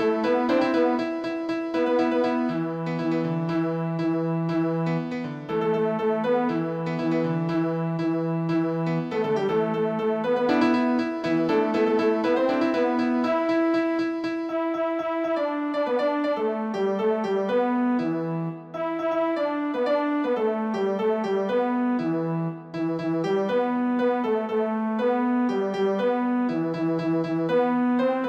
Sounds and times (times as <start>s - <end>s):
Musical instrument: 0.0s - 28.2s.